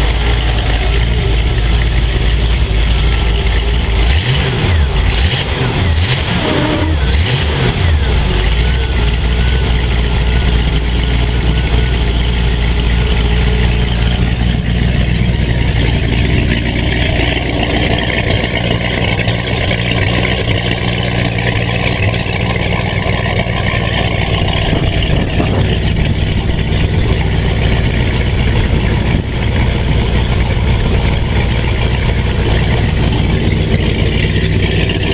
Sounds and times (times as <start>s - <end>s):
Heavy engine (low frequency): 0.0s - 35.1s
Idling: 0.0s - 35.1s
Medium engine (mid frequency): 0.0s - 35.1s
Vehicle: 0.0s - 35.1s.